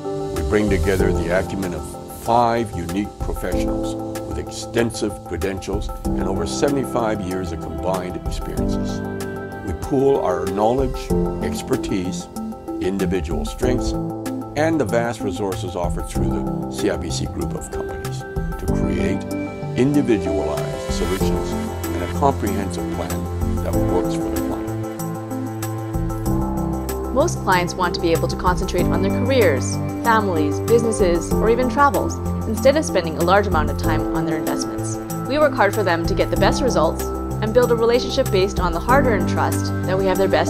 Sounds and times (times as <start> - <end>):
Music: 0.0 - 40.4
Speech: 0.4 - 9.0, 9.7 - 14.0, 14.6 - 19.2, 19.8 - 24.7, 27.2 - 40.4.